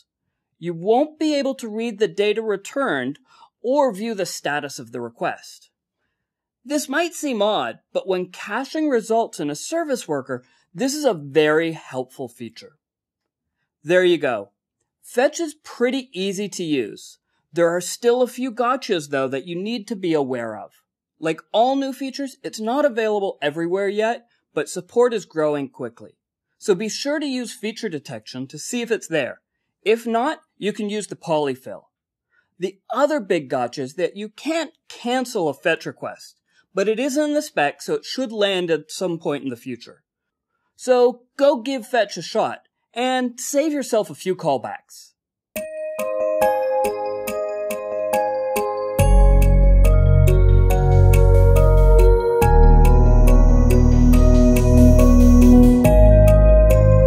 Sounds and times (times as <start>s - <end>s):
Lullaby: 45.6s - 57.0s.